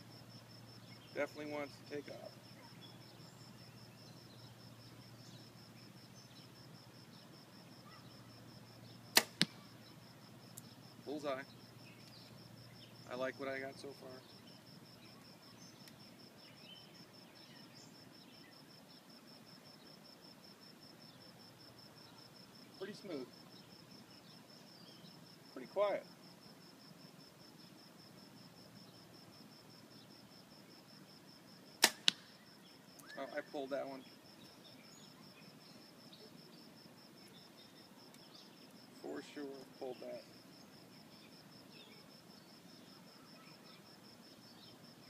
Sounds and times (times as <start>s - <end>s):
Outside, rural or natural: 0.0s - 45.0s
Speech: 1.2s - 2.4s, 13.1s - 14.3s, 33.1s - 34.0s, 39.0s - 40.3s.